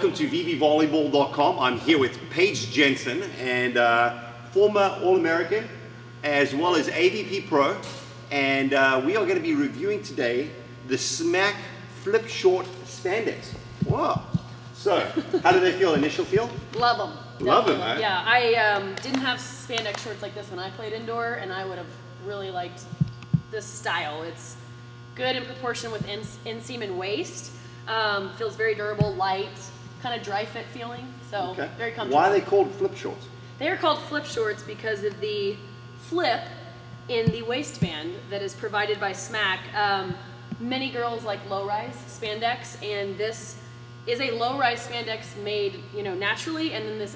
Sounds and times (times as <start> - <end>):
Speech: 37.1 - 43.5.